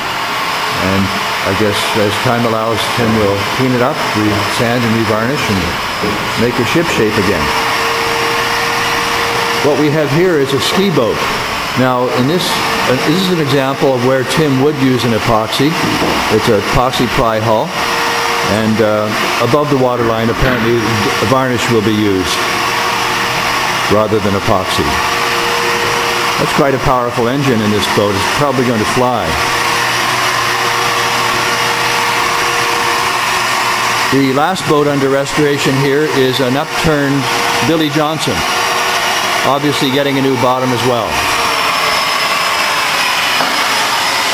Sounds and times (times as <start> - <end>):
Speech: 0.7 - 7.5, 9.6 - 17.7, 18.4 - 22.4, 23.9 - 25.0, 26.4 - 29.4, 34.1 - 38.5, 39.4 - 41.2.